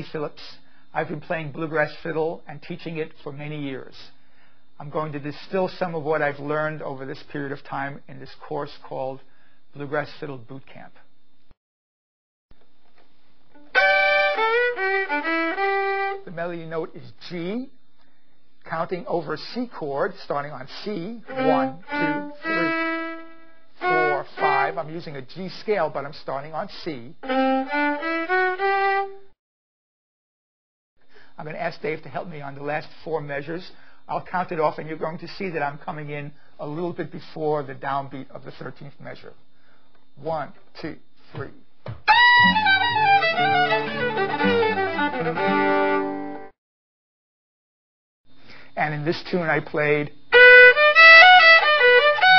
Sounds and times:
Speech: 0:00.0 - 0:04.2, 0:04.8 - 0:11.1, 0:16.2 - 0:17.8, 0:18.6 - 0:22.9, 0:23.8 - 0:27.2, 0:31.4 - 0:39.4, 0:40.2 - 0:41.6, 0:48.8 - 0:50.2
Violin, fiddle: 0:13.6 - 0:16.2, 0:21.3 - 0:24.9, 0:27.2 - 0:29.3, 0:42.1 - 0:46.5, 0:50.3 - 0:52.3.

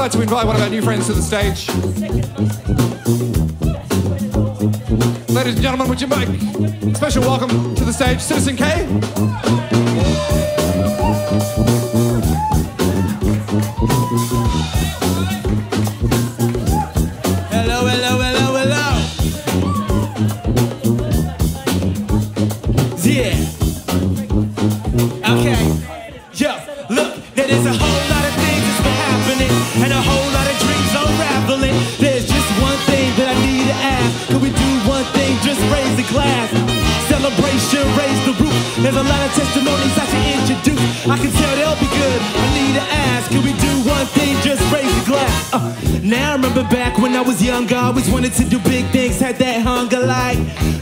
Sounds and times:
Speech: 0:00.0 - 0:10.9, 0:14.5 - 0:50.4
Music: 0:00.0 - 0:50.8.

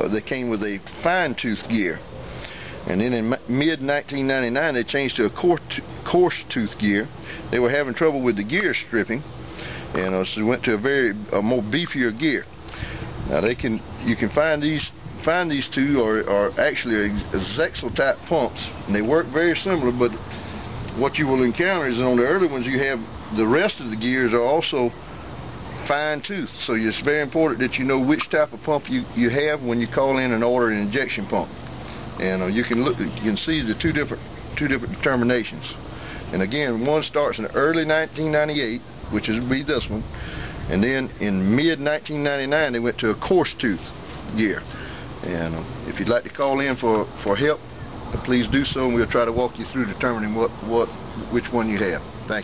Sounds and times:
Speech: 0:00.0 - 0:02.0, 0:02.8 - 0:09.3, 0:09.9 - 0:12.5, 0:13.3 - 0:20.2, 0:20.9 - 0:25.0, 0:25.8 - 0:31.6, 0:32.2 - 0:40.1, 0:40.7 - 0:52.4.

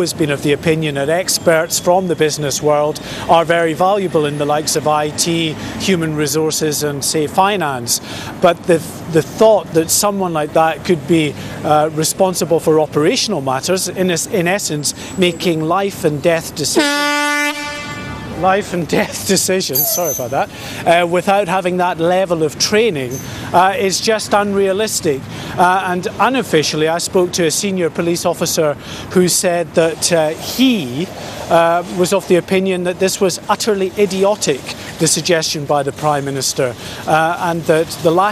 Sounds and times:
Speech: 0:00.0 - 0:16.9, 0:18.4 - 0:38.3.

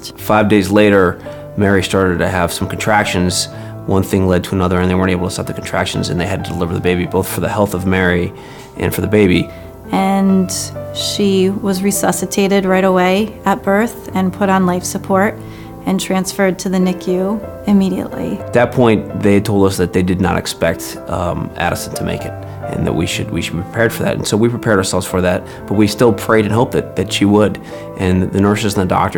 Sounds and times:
Speech: 0:00.0 - 0:15.3, 0:15.9 - 0:29.1
Music: 0:00.0 - 0:29.1.

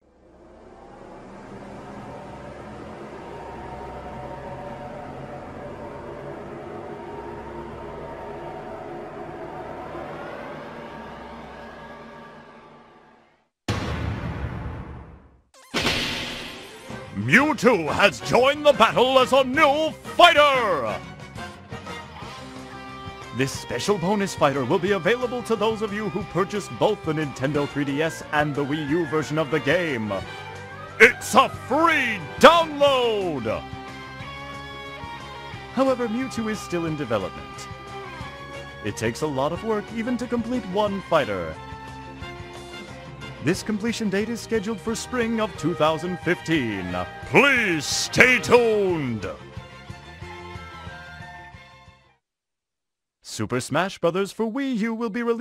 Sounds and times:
Music: 0:00.0 - 0:13.6, 0:14.8 - 0:52.2
Speech: 0:17.2 - 0:21.0, 0:23.4 - 0:30.2, 0:31.0 - 0:33.6, 0:35.8 - 0:37.7, 0:38.9 - 0:41.6, 0:43.4 - 0:49.4, 0:53.3 - 0:55.4.

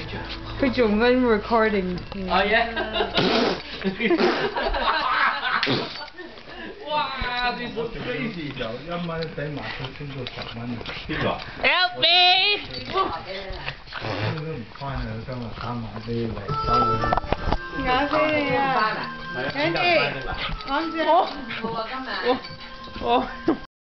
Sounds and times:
Music: 0:00.0 - 0:03.7, 0:16.1 - 0:23.7.

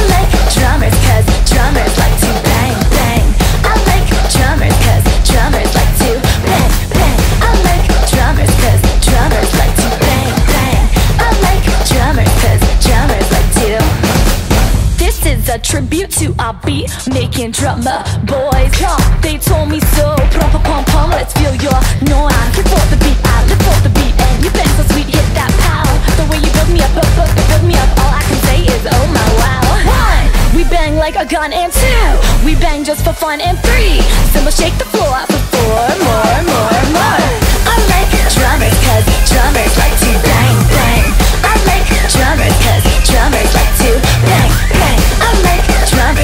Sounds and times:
Music: 0:00.0 - 0:46.2.

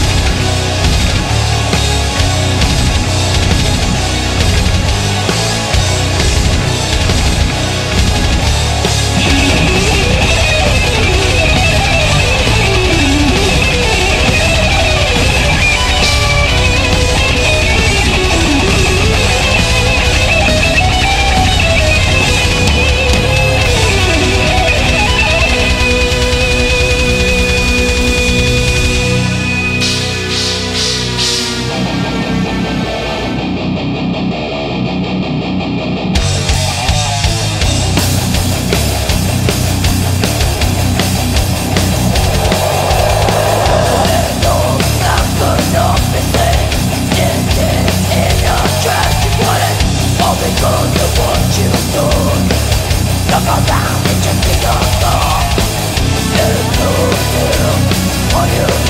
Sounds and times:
Heavy metal: 0:00.0 - 0:58.8.

